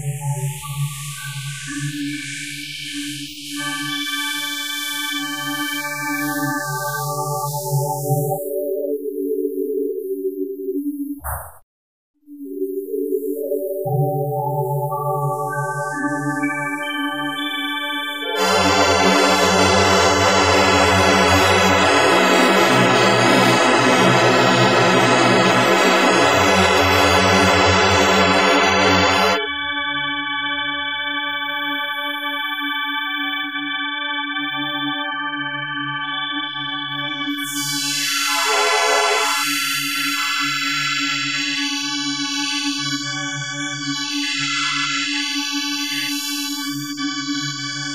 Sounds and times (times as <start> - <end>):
Ambient music: 12.8 - 29.8, 36.8 - 40.9.